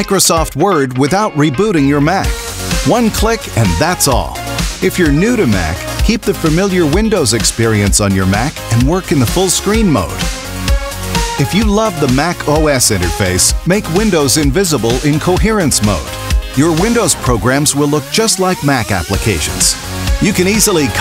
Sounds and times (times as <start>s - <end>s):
Speech: 0.0s - 10.2s, 11.4s - 21.0s
Music: 0.0s - 21.0s.